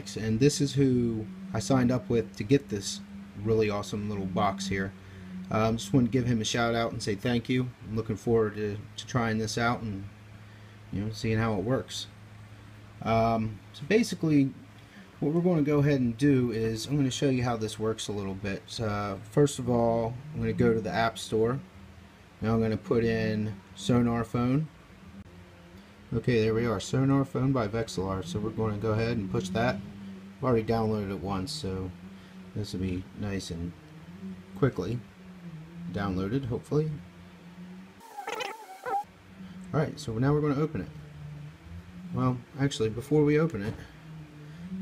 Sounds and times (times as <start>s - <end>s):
Speech: 0.0s - 10.1s, 10.9s - 12.1s, 13.0s - 14.6s, 15.2s - 21.6s, 22.4s - 24.8s, 26.1s - 32.0s, 32.6s - 33.8s, 34.6s - 35.1s, 35.9s - 37.0s, 39.7s - 41.0s, 42.1s - 43.9s.